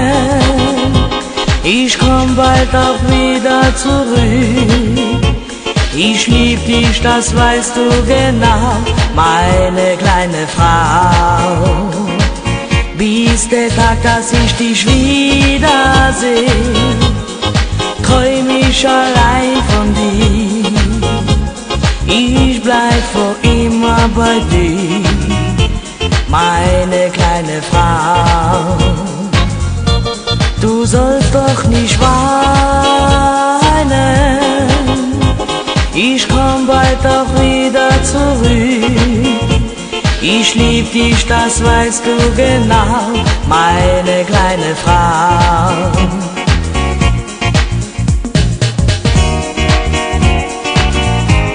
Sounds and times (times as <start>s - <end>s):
Music: 0.0s - 51.5s.